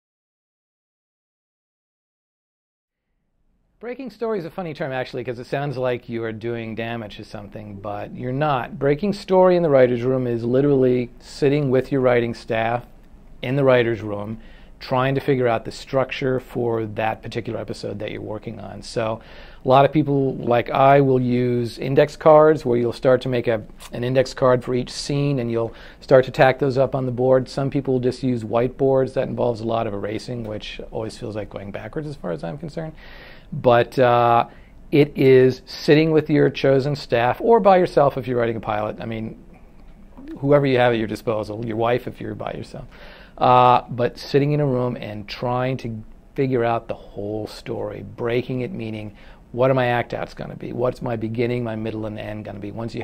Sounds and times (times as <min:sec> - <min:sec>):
Speech: 0:03.8 - 0:39.5, 0:40.2 - 0:53.0.